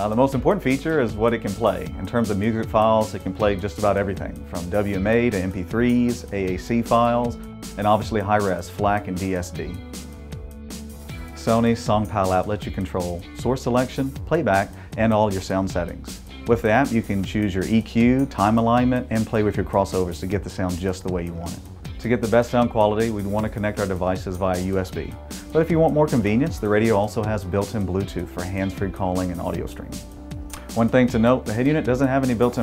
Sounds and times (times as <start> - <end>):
Speech: 0.0 - 9.8, 11.4 - 30.0, 30.7 - 32.6
Music: 0.0 - 32.6.